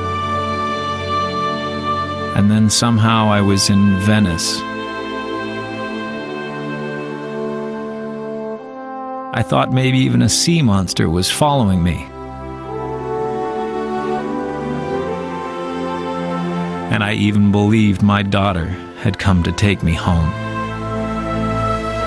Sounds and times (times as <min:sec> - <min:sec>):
Music: 0:00.0 - 0:22.0
Speech: 0:02.4 - 0:04.6, 0:09.4 - 0:12.1, 0:16.9 - 0:20.4.